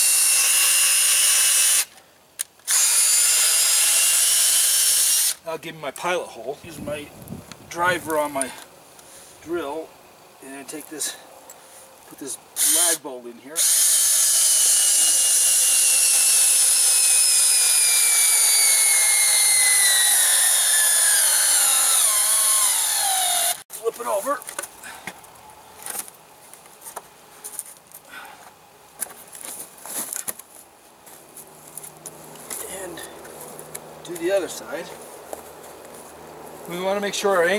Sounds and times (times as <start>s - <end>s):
Speech: 5.5s - 7.1s, 7.7s - 8.6s, 9.4s - 11.2s, 12.1s - 13.6s, 23.8s - 24.5s, 32.6s - 33.2s, 34.0s - 35.0s, 36.7s - 37.5s.